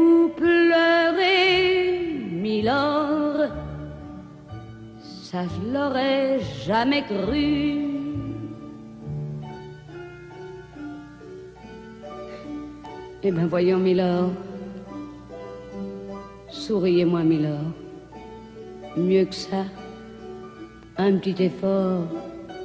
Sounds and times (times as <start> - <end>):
Piano: 0.0 - 22.6.